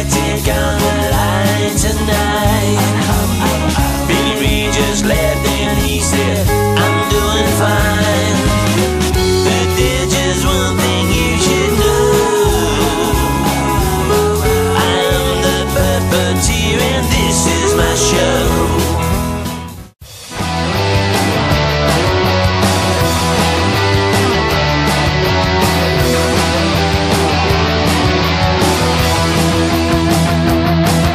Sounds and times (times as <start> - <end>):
Happy music: 0.0 - 31.1.